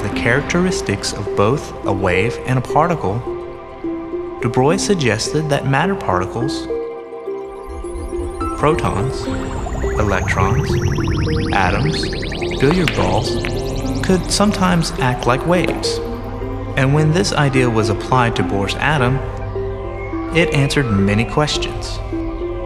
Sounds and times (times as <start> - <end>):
Speech: 0.0 - 3.3, 4.4 - 6.7, 8.6 - 9.4, 10.0 - 13.4, 14.0 - 16.0, 16.8 - 19.3, 20.3 - 22.0
Music: 0.0 - 22.6.